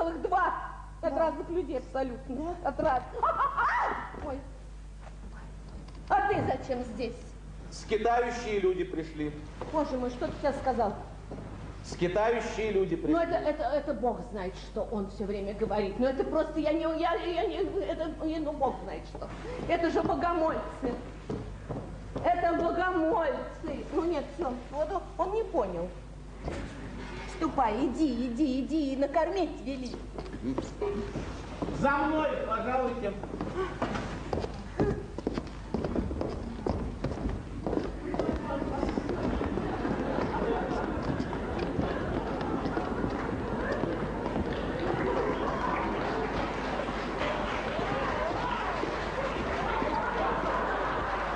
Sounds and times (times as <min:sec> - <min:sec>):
Female speech, woman speaking: 0:00.0 - 0:04.6, 0:06.1 - 0:07.4, 0:09.6 - 0:11.1, 0:13.1 - 0:21.1, 0:22.2 - 0:26.0, 0:27.3 - 0:31.0, 0:38.1 - 0:39.3.